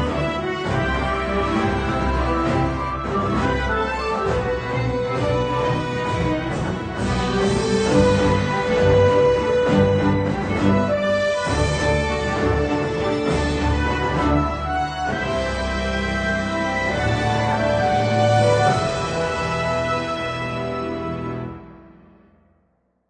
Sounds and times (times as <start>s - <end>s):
Video game music: 0.0s - 22.3s.